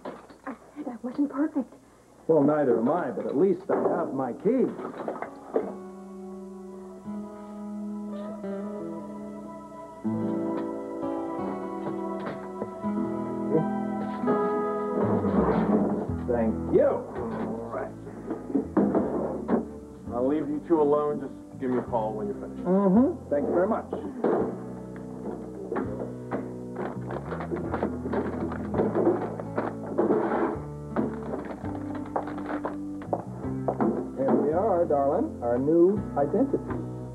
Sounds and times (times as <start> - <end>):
Music: 2.4 - 37.1.